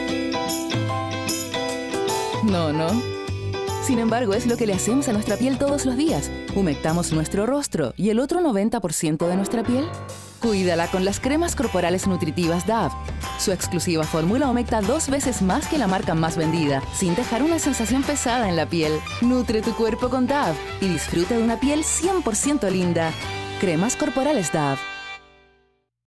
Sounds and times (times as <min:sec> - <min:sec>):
Music: 0:00.0 - 0:25.9
Speech: 0:02.4 - 0:03.1, 0:03.8 - 0:24.8.